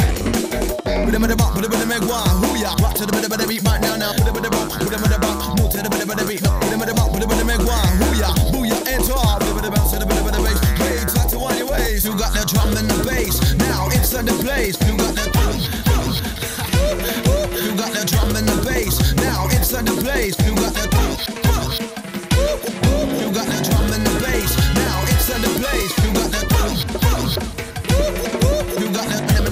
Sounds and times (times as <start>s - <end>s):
Music: 0.0s - 29.5s
Rapping: 0.0s - 29.5s.